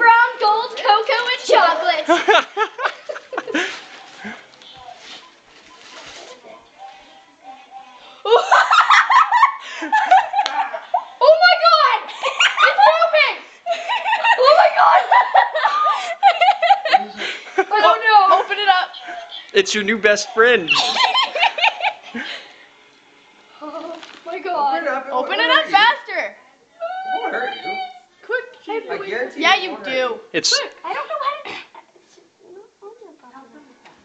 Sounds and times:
Child speech, kid speaking: 0:00.0 - 0:02.1, 0:11.2 - 0:13.4, 0:14.4 - 0:15.1, 0:17.7 - 0:19.0, 0:23.7 - 0:26.5, 0:27.1 - 0:33.8
Snicker: 0:02.0 - 0:03.8, 0:08.3 - 0:11.2, 0:13.7 - 0:17.8, 0:20.7 - 0:22.4.

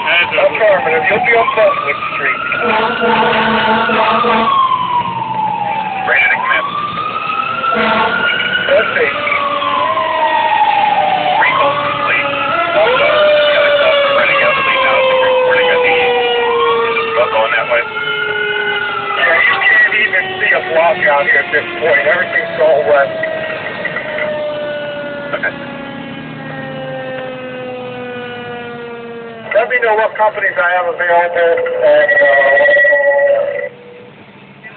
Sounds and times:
Truck: 0:00.0 - 0:18.0, 0:18.8 - 0:34.7
Fire engine, fire truck (siren): 0:00.0 - 0:34.7
Speech: 0:11.4 - 0:16.0, 0:17.1 - 0:17.8, 0:19.2 - 0:23.1, 0:29.5 - 0:33.7.

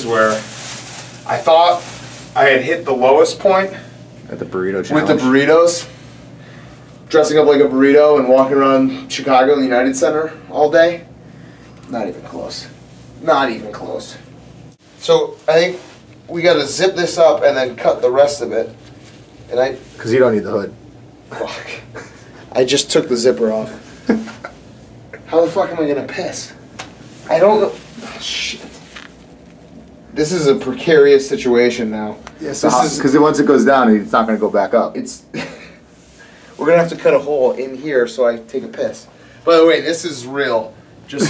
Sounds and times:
Speech: 0:00.0 - 0:00.5, 0:01.2 - 0:05.9, 0:07.1 - 0:11.1, 0:11.9 - 0:14.3, 0:15.0 - 0:18.8, 0:19.5 - 0:21.9, 0:22.5 - 0:23.8, 0:25.3 - 0:26.6, 0:27.2 - 0:28.8, 0:30.2 - 0:35.3, 0:36.6 - 0:41.2.

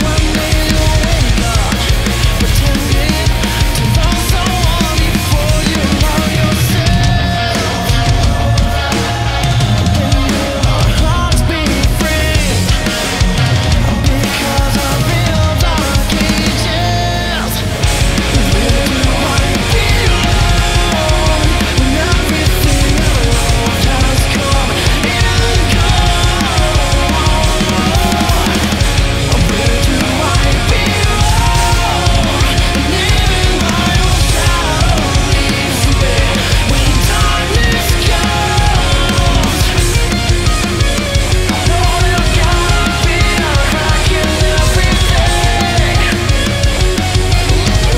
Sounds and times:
Bass drum: 0:00.0 - 0:17.0, 0:17.6 - 0:47.9
Drum kit: 0:00.0 - 0:47.9
Drum roll: 0:00.0 - 0:47.9.

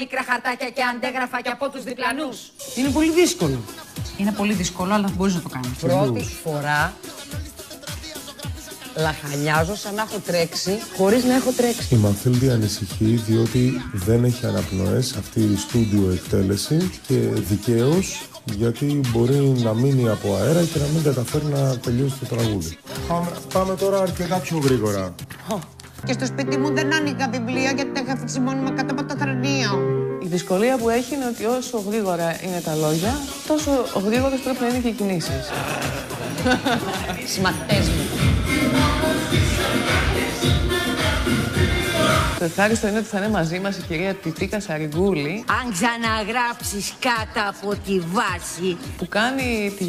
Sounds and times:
Music of Asia: 0:02.6 - 0:27.0, 0:30.2 - 0:49.8
Speech: 0:04.2 - 0:06.9.

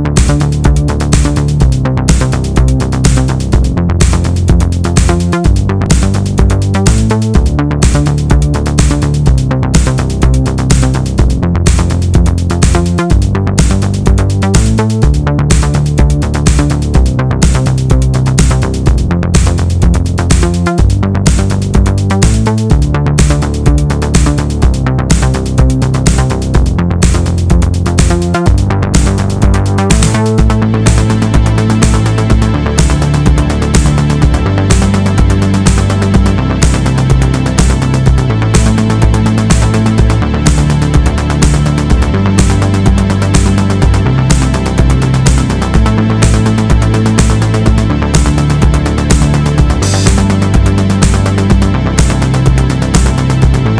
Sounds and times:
Music: 0:00.0 - 0:53.7.

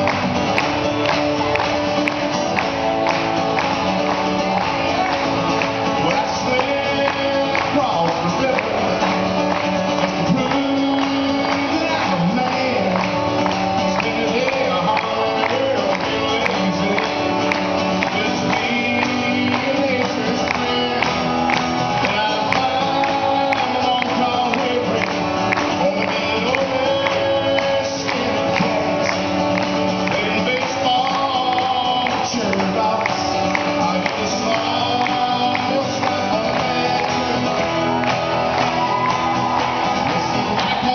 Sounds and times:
Music: 0:00.0 - 0:40.9.

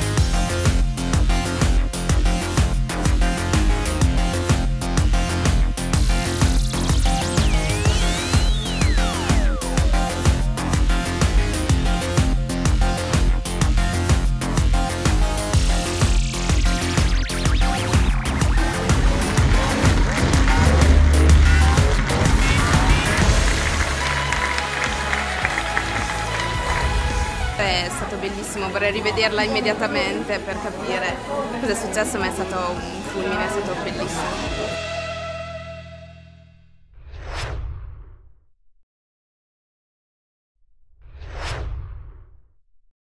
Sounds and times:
Sound effect: 0:06.3 - 0:10.2, 0:15.7 - 0:24.1, 0:34.8 - 0:38.6, 0:40.7 - 0:42.9.

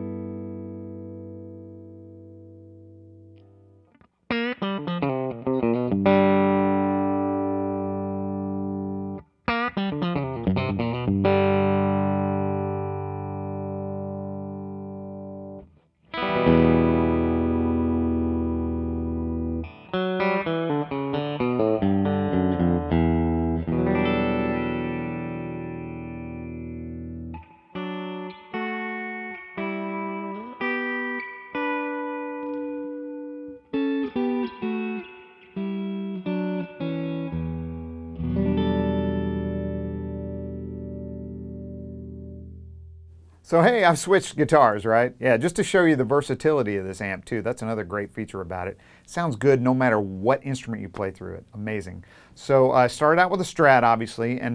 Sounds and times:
Electric guitar: 0:00.0 - 0:43.4.

